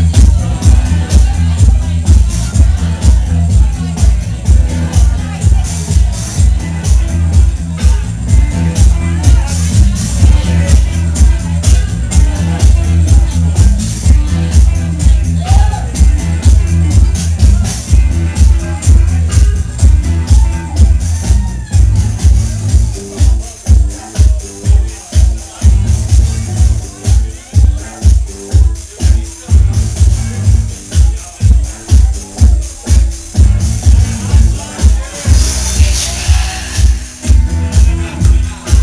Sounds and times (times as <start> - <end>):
Music: 0.0 - 38.8.